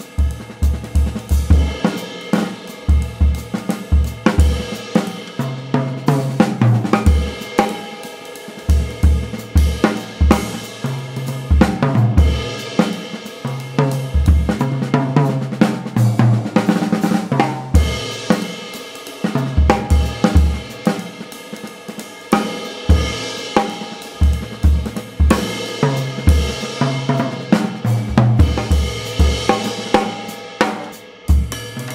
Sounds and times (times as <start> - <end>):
Bass drum: 0.0 - 1.9, 8.8 - 10.7, 19.4 - 20.8, 24.2 - 26.6, 27.2 - 31.9
Drum kit: 0.0 - 31.9.